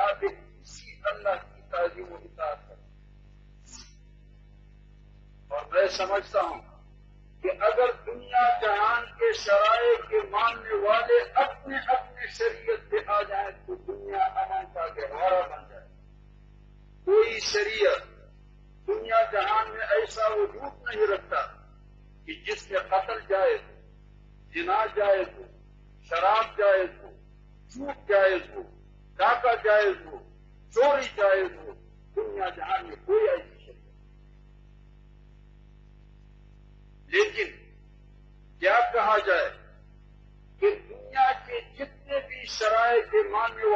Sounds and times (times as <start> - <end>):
Male speech, man speaking: 0.0 - 2.8, 5.5 - 6.8, 7.4 - 15.9, 17.1 - 18.2, 18.9 - 21.7, 22.3 - 23.8, 24.5 - 33.8, 37.1 - 37.7, 38.6 - 39.8, 40.6 - 43.7
Narration, monologue: 0.0 - 43.7.